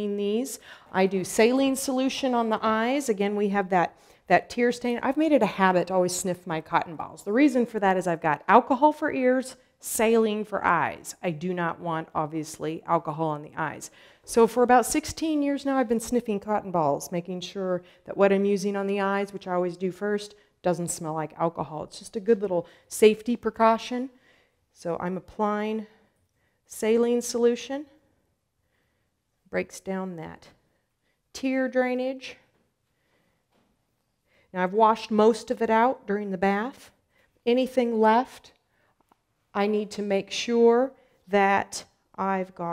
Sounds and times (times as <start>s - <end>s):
Speech: 0.0s - 24.1s, 24.8s - 25.9s, 26.7s - 28.0s, 29.5s - 30.6s, 31.4s - 32.4s, 34.5s - 38.5s, 39.6s - 42.7s.